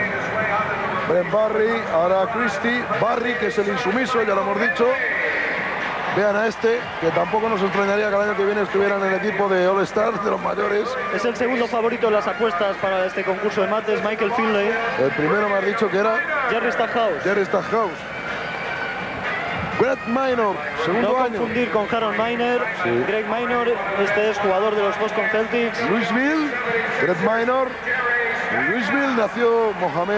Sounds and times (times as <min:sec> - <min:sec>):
Speech: 0:00.0 - 0:05.4, 0:06.1 - 0:18.0, 0:19.8 - 0:30.1.